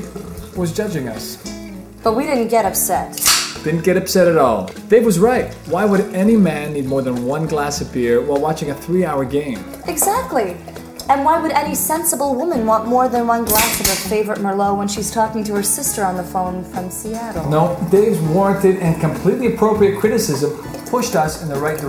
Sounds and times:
Music: 0.0 - 21.8
Speech: 0.6 - 1.4, 3.7 - 21.8.

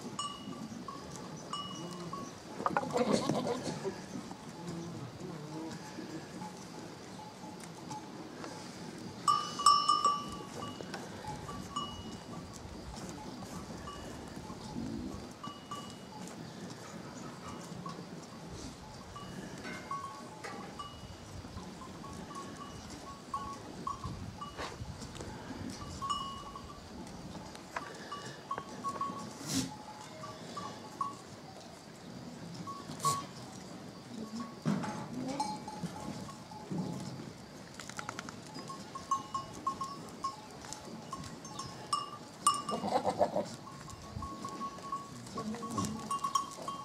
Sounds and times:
Goat: 0.0 - 46.8
Domestic animals, pets: 42.7 - 43.6.

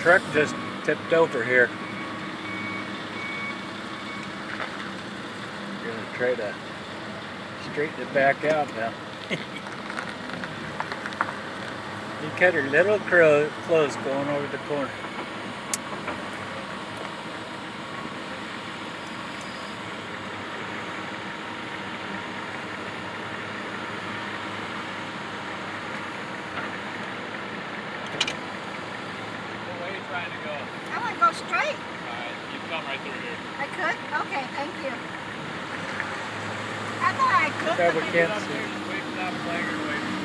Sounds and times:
Vehicle: 0.0 - 40.2.

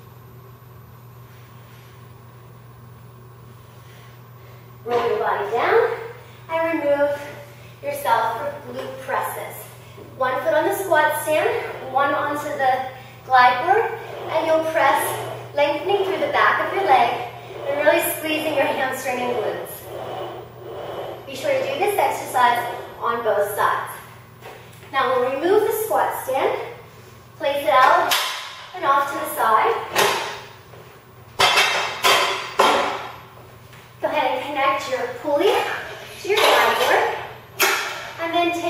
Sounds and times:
Female speech, woman speaking: 4.9 - 19.9, 21.3 - 24.1, 24.9 - 26.8, 27.4 - 28.1, 28.8 - 29.9, 34.0 - 37.3, 38.2 - 38.6.

